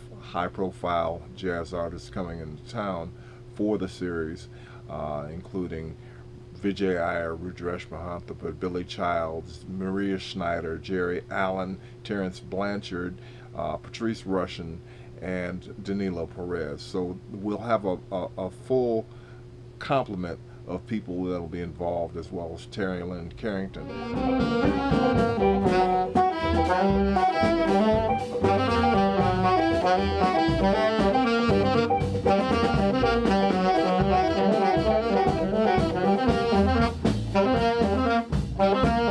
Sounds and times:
Speech: 0.0s - 6.0s, 6.6s - 19.1s, 19.8s - 23.9s.

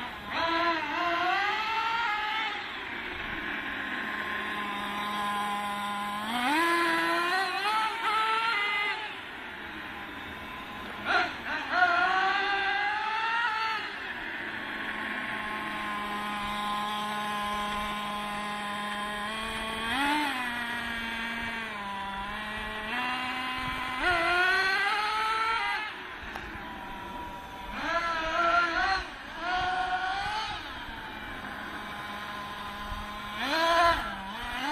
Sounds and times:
Accelerating, revving, vroom: 0.0s - 2.8s, 4.0s - 9.2s, 10.2s - 14.0s, 14.8s - 26.5s, 27.4s - 34.7s
Car: 0.0s - 34.7s.

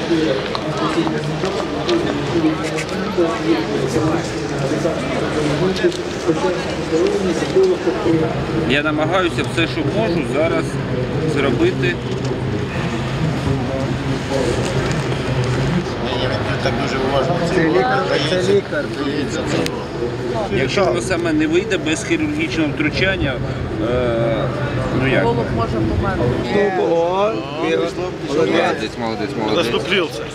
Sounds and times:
Speech: 0.0s - 30.3s.

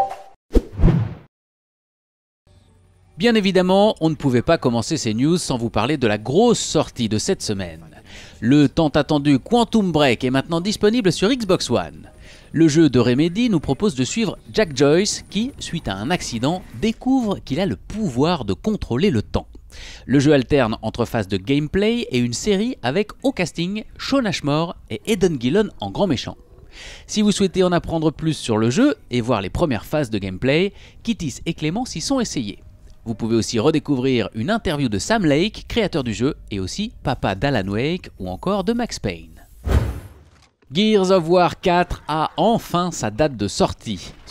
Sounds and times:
Speech: 3.2s - 19.5s, 20.1s - 26.4s, 27.1s - 39.5s, 40.7s - 44.3s.

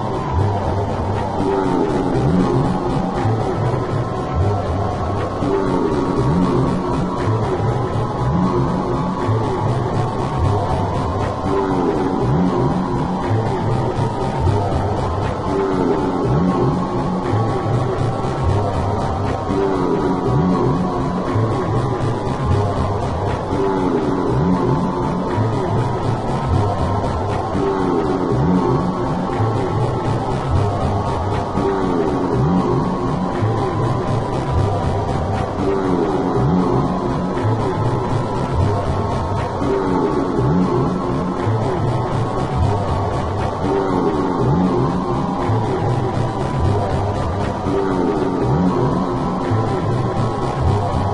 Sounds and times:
Music: 0.0s - 51.1s.

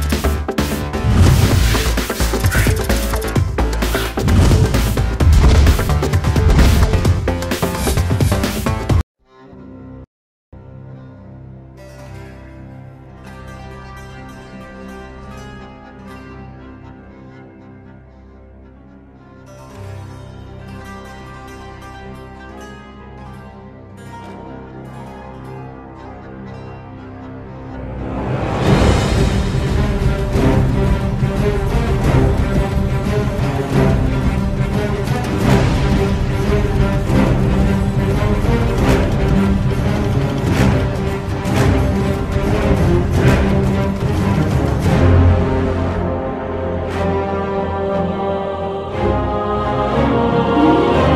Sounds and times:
Music: 0.0s - 51.1s.

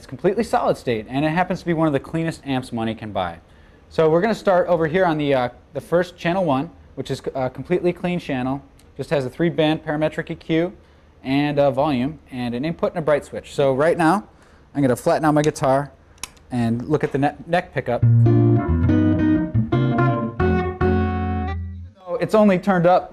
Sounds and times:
Speech: 0.0s - 18.1s, 22.0s - 23.1s.

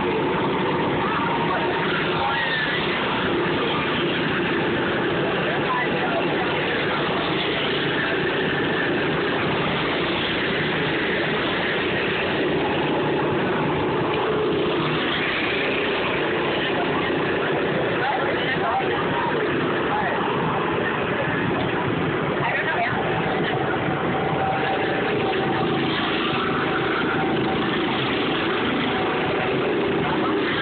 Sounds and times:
Car: 0.0s - 30.6s
Speech: 0.2s - 9.6s, 16.1s - 30.6s.

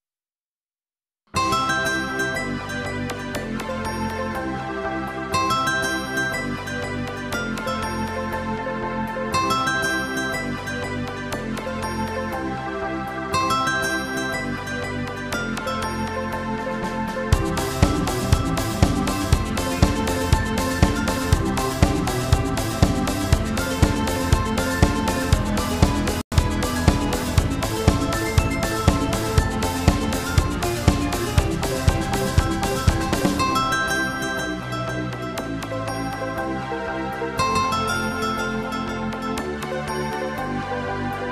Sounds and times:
Music: 1.3s - 41.3s.

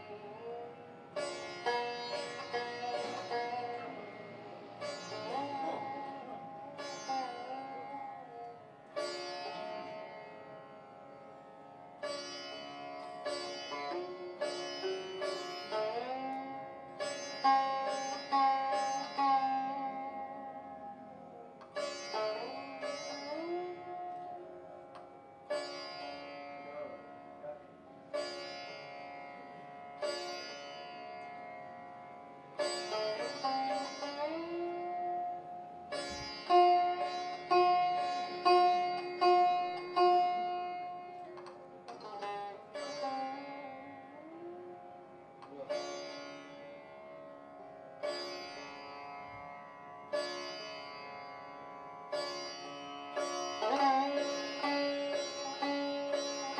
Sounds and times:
Sitar: 0.0s - 56.5s.

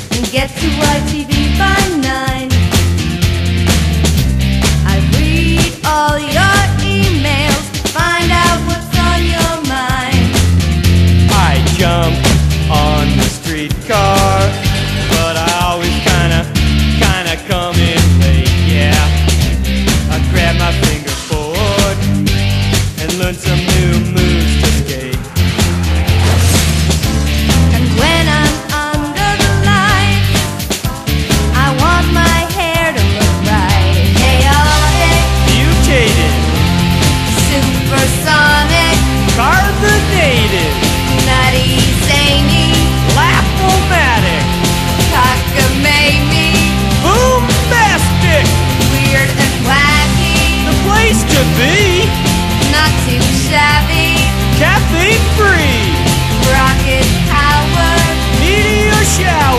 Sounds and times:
Music: 0.0s - 59.5s.

